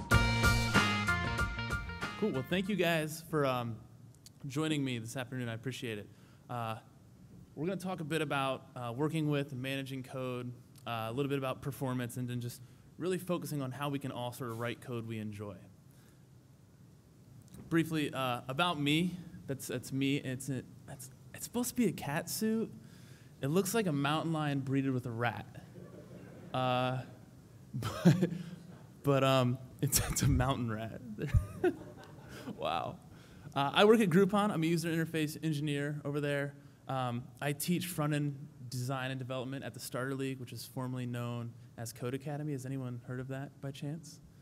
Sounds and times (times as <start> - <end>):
Speech: 2.2 - 6.9, 7.6 - 15.7, 17.6 - 22.8, 23.4 - 27.2, 29.0 - 31.5, 32.6 - 33.0, 33.6 - 44.2.